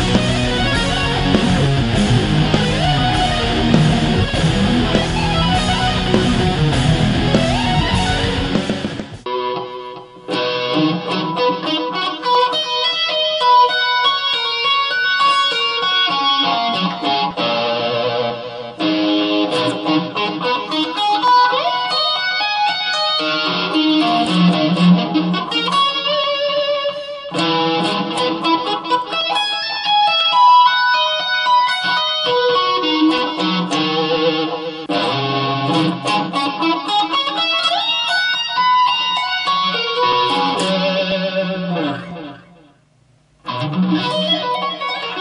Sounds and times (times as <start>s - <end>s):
Tapping (guitar technique): 0.0s - 42.8s, 43.4s - 45.2s
Electric guitar: 0.0s - 45.2s.